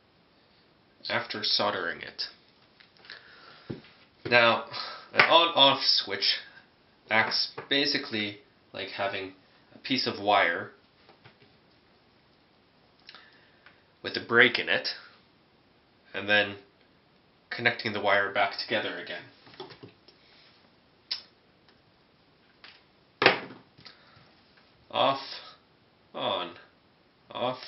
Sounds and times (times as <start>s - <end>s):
Speech: 1.0s - 2.4s, 4.3s - 10.8s, 14.0s - 15.1s, 16.1s - 16.7s, 17.5s - 19.4s, 24.9s - 26.7s, 27.3s - 27.6s.